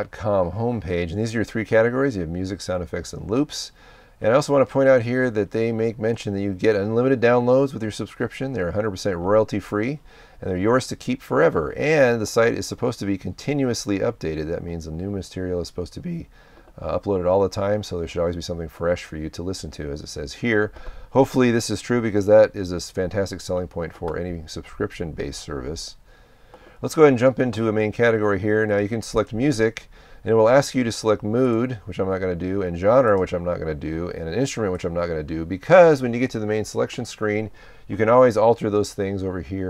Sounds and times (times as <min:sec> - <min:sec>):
Speech: 0:00.0 - 0:26.0, 0:26.8 - 0:39.6.